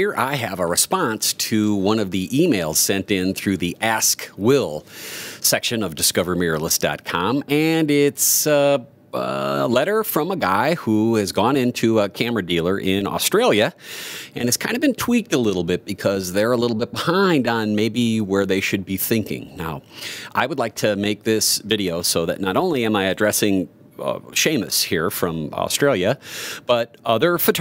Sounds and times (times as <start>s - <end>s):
Speech: 0.0s - 4.8s, 5.4s - 13.8s, 14.4s - 19.8s, 20.4s - 27.6s.